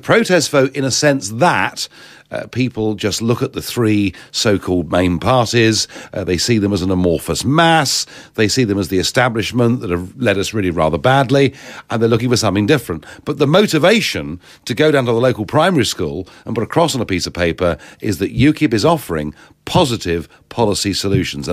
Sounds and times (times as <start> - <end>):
Speech: 0.0 - 21.5.